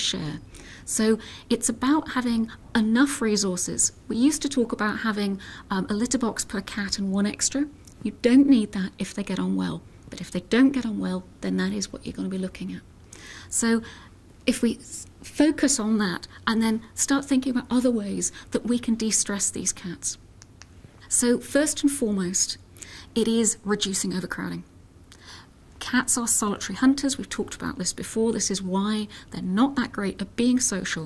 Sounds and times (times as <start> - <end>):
Speech: 0.0 - 12.8, 13.5 - 13.9, 14.5 - 20.2, 21.1 - 22.6, 23.2 - 24.7, 25.8 - 31.0.